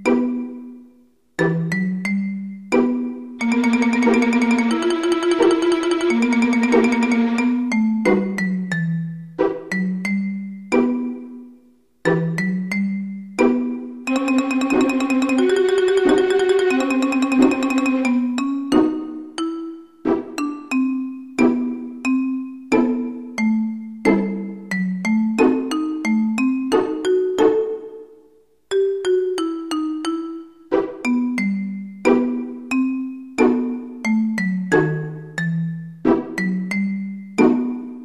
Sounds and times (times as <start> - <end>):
Music: 0.0 - 38.0.